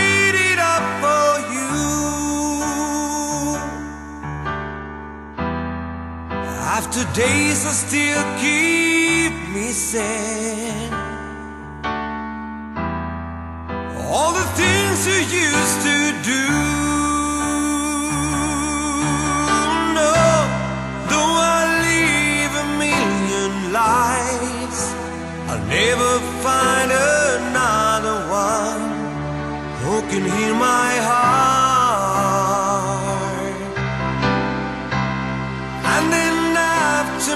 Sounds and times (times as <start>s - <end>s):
Music: 0.0s - 37.3s.